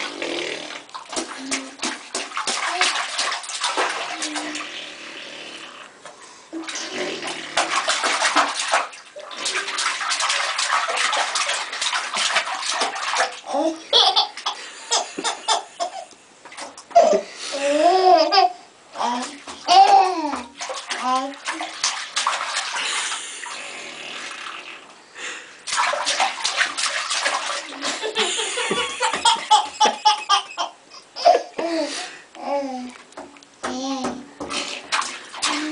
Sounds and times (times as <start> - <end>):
Bathtub (filling or washing): 0.0 - 35.7
Laughter: 27.8 - 30.5.